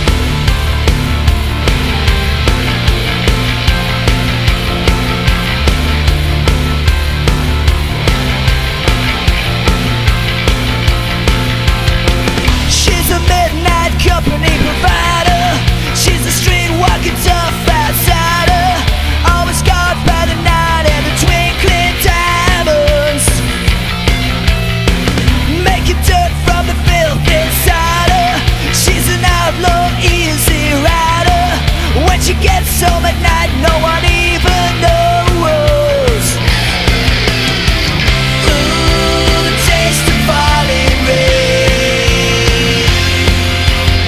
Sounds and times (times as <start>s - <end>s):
Music: 0.0s - 44.0s.